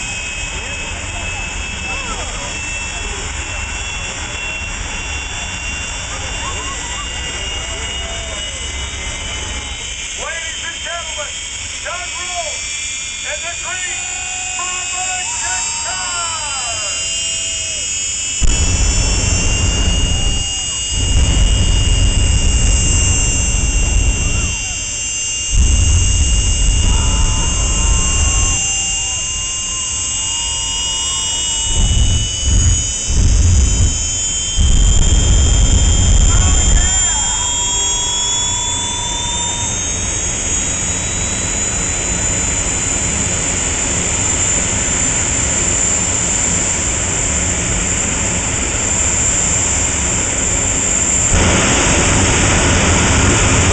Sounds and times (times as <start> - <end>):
Speech: 10.2 - 12.6, 13.2 - 17.0.